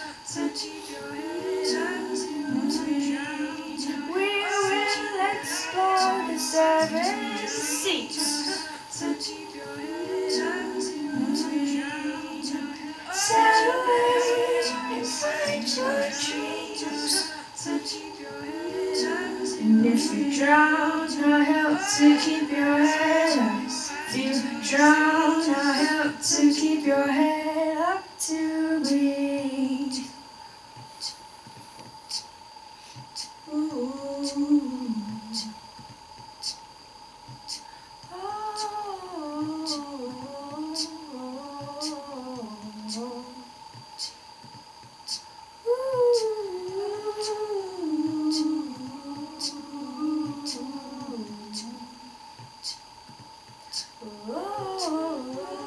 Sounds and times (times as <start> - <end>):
Inside, small room: 0.0 - 55.6.